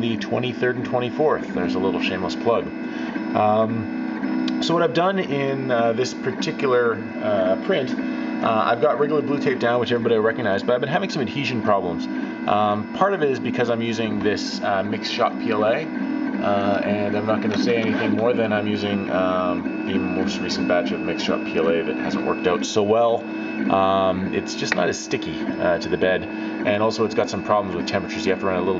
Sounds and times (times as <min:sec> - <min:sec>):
Speech: 0:00.0 - 0:03.9, 0:04.5 - 0:28.7
Printer: 0:00.0 - 0:28.7.